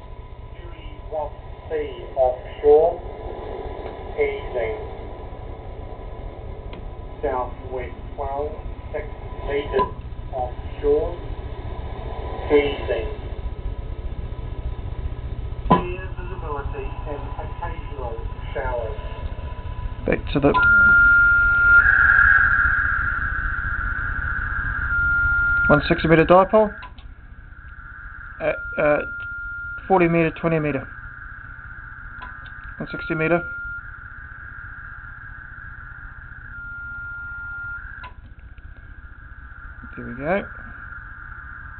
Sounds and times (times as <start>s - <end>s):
Speech: 0.6s - 3.1s, 4.2s - 4.9s, 7.2s - 11.3s, 12.5s - 13.2s, 15.7s - 19.2s, 20.0s - 20.9s, 25.7s - 26.9s, 28.4s - 29.1s, 29.8s - 30.9s, 32.8s - 33.5s, 39.9s - 40.6s
Radio: 0.6s - 5.2s, 7.2s - 11.4s, 12.4s - 13.3s, 15.7s - 22.9s, 24.9s - 27.0s, 28.4s - 31.0s, 32.2s - 34.0s, 39.8s - 41.0s.